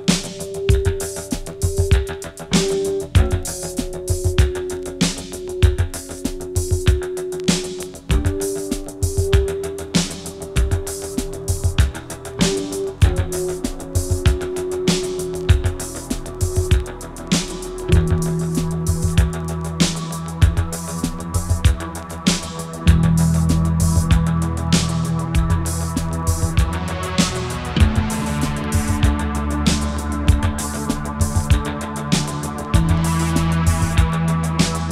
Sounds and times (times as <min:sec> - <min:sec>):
Music: 0:00.0 - 0:34.9.